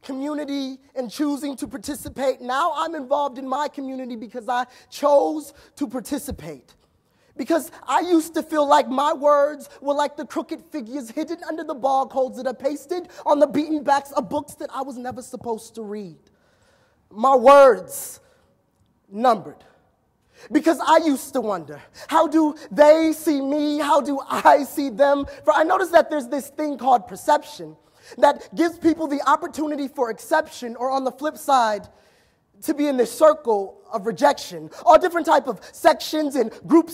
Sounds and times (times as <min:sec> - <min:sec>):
Speech: 0:00.0 - 0:06.8, 0:07.4 - 0:16.2, 0:17.1 - 0:18.2, 0:19.1 - 0:19.8, 0:20.5 - 0:31.9, 0:32.6 - 0:36.9.